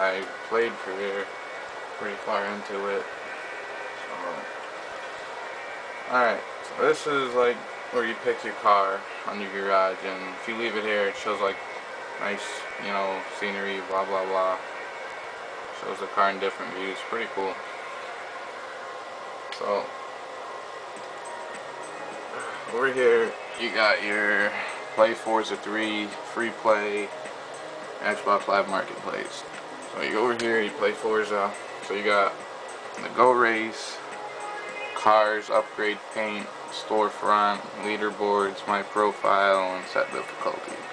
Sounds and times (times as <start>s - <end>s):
Speech: 0.0s - 1.3s, 2.0s - 3.1s, 4.0s - 4.5s, 6.1s - 11.6s, 12.2s - 14.6s, 15.8s - 17.6s, 19.6s - 19.9s, 22.4s - 27.1s, 28.0s - 32.4s, 33.0s - 34.0s, 35.0s - 40.9s
Music: 0.0s - 18.4s, 20.9s - 40.9s.